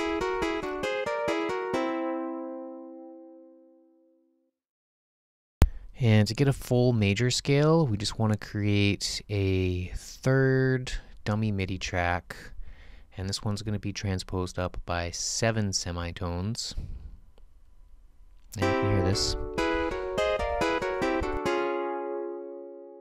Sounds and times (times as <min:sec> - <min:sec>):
Music: 0:00.0 - 0:04.5, 0:18.6 - 0:23.0
Speech: 0:06.0 - 0:12.5, 0:13.2 - 0:16.9, 0:18.6 - 0:19.4.